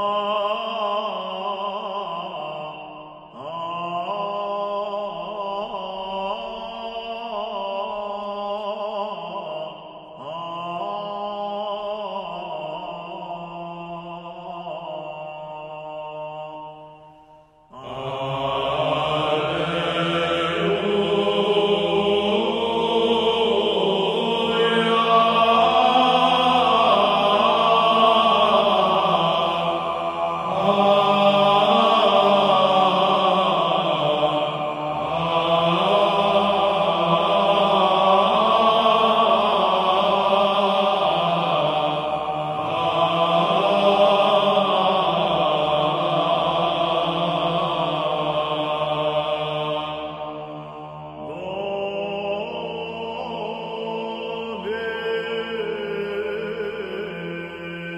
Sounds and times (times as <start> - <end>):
Mantra: 0.0 - 17.0, 17.7 - 57.9.